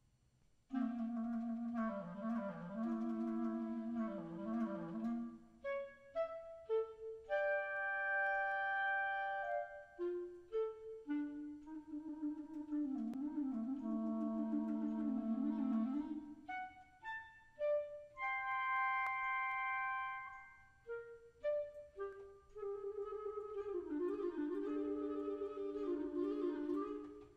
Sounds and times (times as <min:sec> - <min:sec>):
Music: 0:00.7 - 0:27.3.